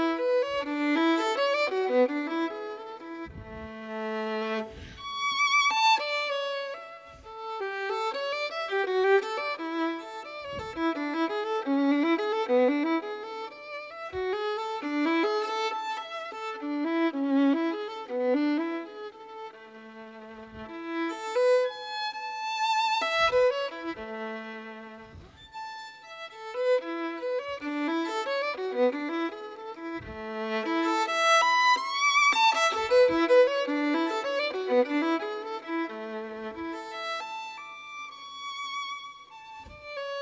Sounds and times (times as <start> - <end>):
Violin, fiddle: 0.0 - 40.2.